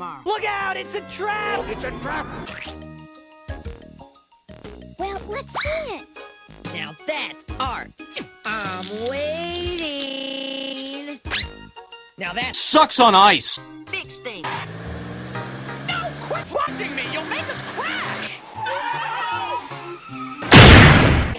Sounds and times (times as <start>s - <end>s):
Speech: 0.0s - 2.4s, 6.7s - 7.9s, 8.5s - 11.2s, 15.9s - 18.3s
Music: 0.0s - 21.3s.